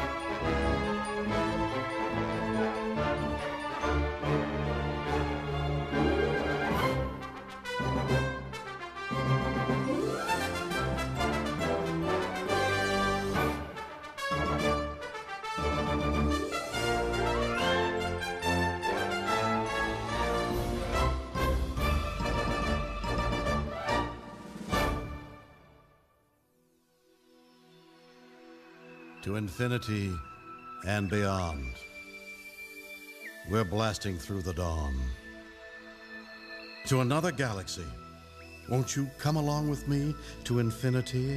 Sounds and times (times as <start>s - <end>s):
Music: 0.0s - 41.3s.